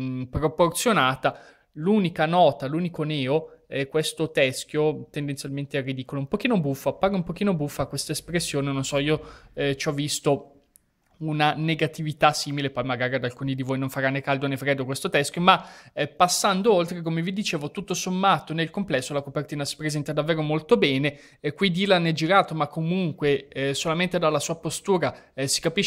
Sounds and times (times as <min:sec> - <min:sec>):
Speech: 0:00.0 - 0:10.5, 0:11.2 - 0:25.8.